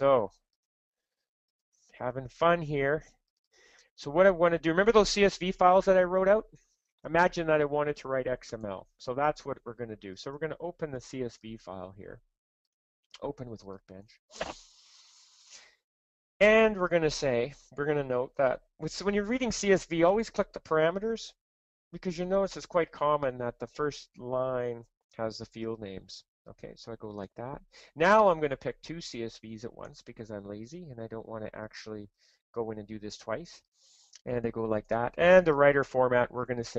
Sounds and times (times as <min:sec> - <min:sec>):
Speech: 0:00.0 - 0:00.4, 0:02.0 - 0:03.2, 0:04.0 - 0:06.5, 0:07.1 - 0:12.2, 0:13.2 - 0:14.2, 0:16.4 - 0:21.4, 0:22.0 - 0:33.6, 0:34.2 - 0:36.7.